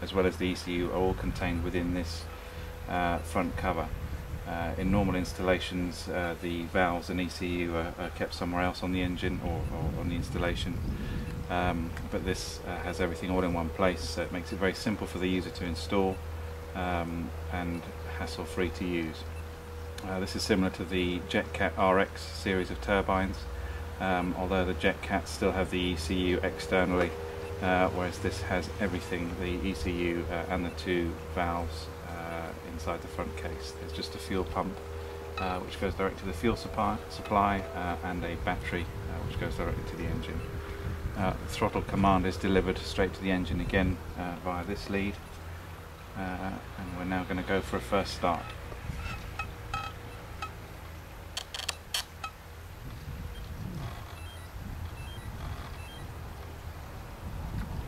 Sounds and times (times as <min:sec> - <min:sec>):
Speech: 0:00.0 - 0:02.3, 0:02.9 - 0:03.9, 0:04.5 - 0:10.8, 0:11.5 - 0:16.2, 0:16.8 - 0:19.3, 0:20.0 - 0:34.8, 0:35.4 - 0:40.5, 0:41.2 - 0:45.2, 0:46.2 - 0:48.6.